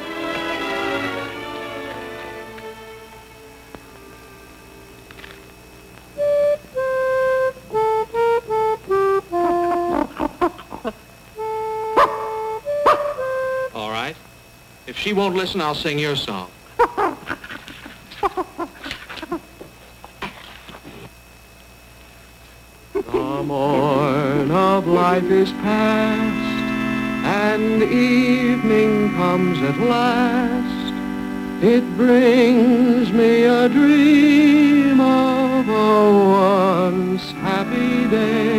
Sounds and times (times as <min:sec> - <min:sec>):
Music: 0:00.0 - 0:05.5, 0:06.2 - 0:10.1, 0:11.4 - 0:13.9, 0:23.8 - 0:38.5
Bow-wow: 0:12.0 - 0:13.2
Speech: 0:13.8 - 0:14.2, 0:14.9 - 0:16.5.